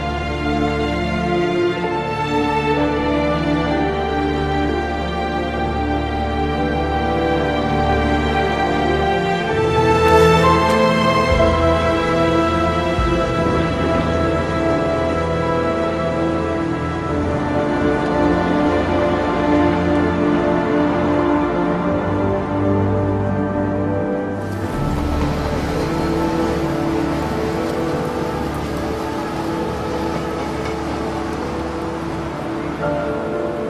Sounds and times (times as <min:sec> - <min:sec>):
Music: 0:00.0 - 0:33.7.